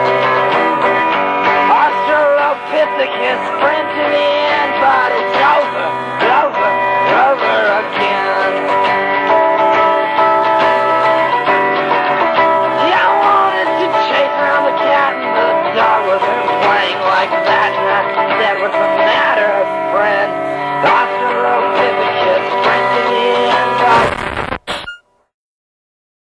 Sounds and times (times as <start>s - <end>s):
Music: 0.0s - 24.6s.